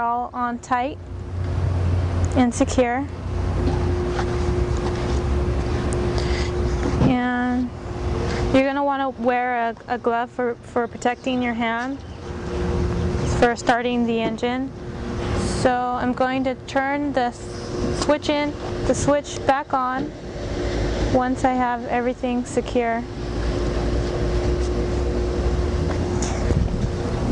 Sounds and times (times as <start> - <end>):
Speech: 2.4 - 3.1, 7.0 - 7.7, 8.6 - 12.0, 13.4 - 14.7, 15.6 - 17.4, 18.1 - 20.1, 21.2 - 23.1.